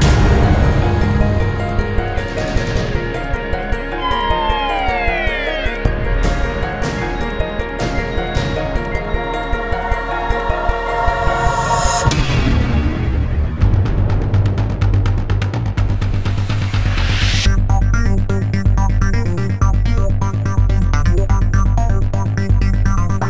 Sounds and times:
Music: 0.0 - 23.2.

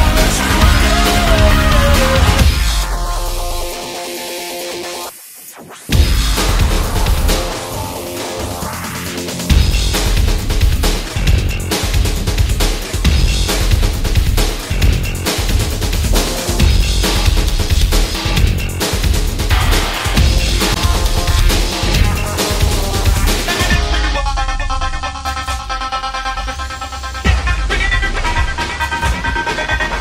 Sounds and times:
Techno: 0.0 - 30.0.

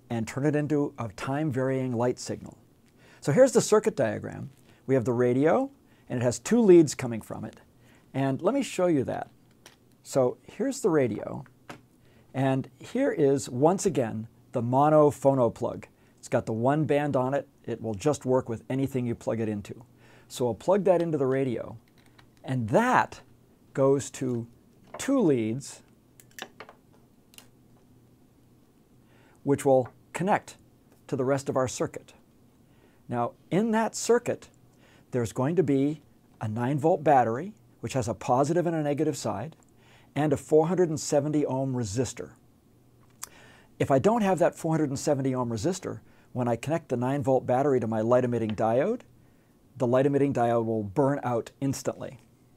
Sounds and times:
Speech: 0.1 - 2.6, 3.2 - 7.6, 8.2 - 9.3, 10.0 - 11.5, 12.3 - 21.8, 22.4 - 25.9, 29.4 - 32.2, 33.1 - 34.5, 35.1 - 39.6, 40.2 - 42.4, 43.8 - 49.1, 49.8 - 52.2.

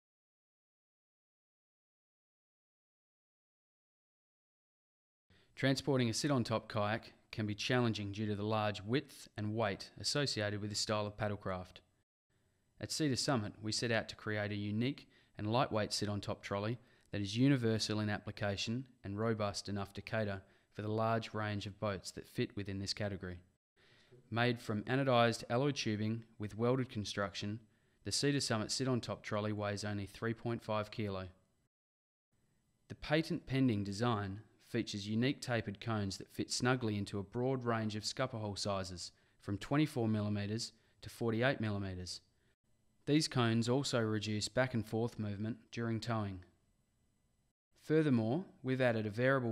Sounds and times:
Speech: 5.6 - 11.9, 12.8 - 23.5, 24.3 - 31.4, 32.9 - 42.3, 43.1 - 46.5, 47.8 - 49.5.

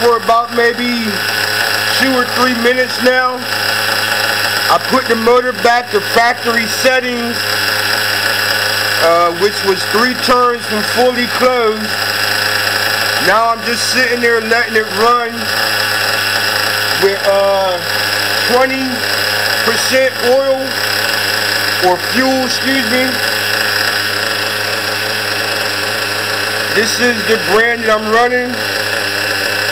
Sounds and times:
Speech: 0.0 - 1.2, 2.0 - 3.4, 4.7 - 7.4, 9.0 - 11.9, 13.2 - 15.5, 17.0 - 17.9, 18.5 - 19.0, 19.7 - 20.8, 21.8 - 23.2, 26.8 - 28.6
Idling: 0.0 - 29.7.

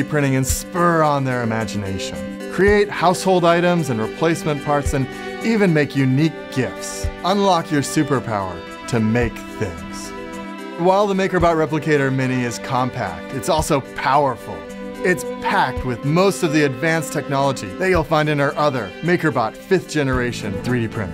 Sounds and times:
Speech: 0.0 - 10.2, 10.8 - 21.1
Music: 0.0 - 21.1.

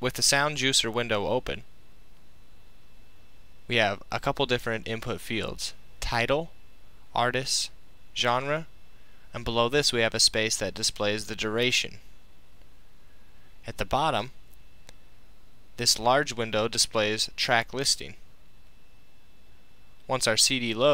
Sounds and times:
Speech: 0.0 - 1.7, 3.7 - 8.7, 9.3 - 12.0, 13.6 - 14.4, 15.8 - 18.2, 20.1 - 20.9.

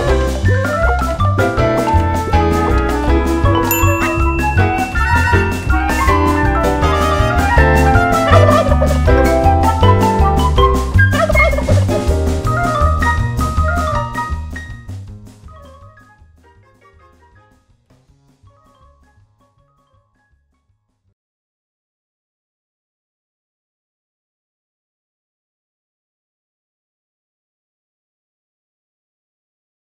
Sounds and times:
Music: 0.0 - 21.2.

